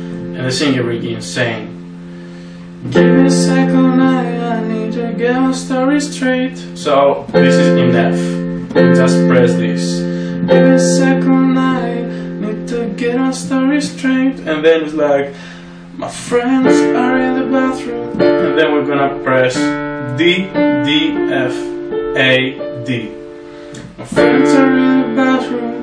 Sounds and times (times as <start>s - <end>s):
Piano: 0.0s - 25.8s
Speech: 0.4s - 1.8s, 6.5s - 8.4s, 9.0s - 10.0s, 18.4s - 23.2s.